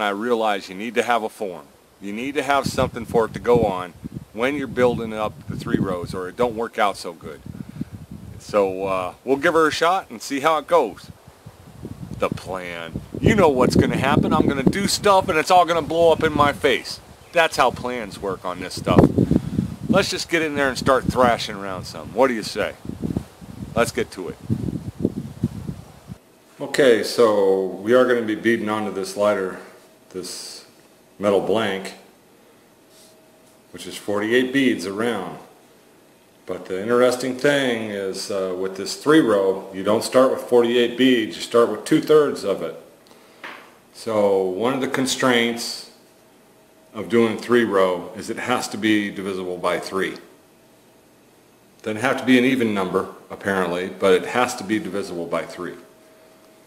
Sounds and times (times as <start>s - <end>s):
Speech: 0.0s - 7.4s, 8.4s - 11.2s, 12.2s - 19.1s, 19.9s - 22.8s, 23.8s - 24.4s, 26.6s - 32.1s, 33.7s - 35.6s, 36.5s - 42.9s, 44.0s - 46.0s, 47.0s - 50.3s, 51.8s - 55.9s
Outside, rural or natural: 1.8s - 26.3s.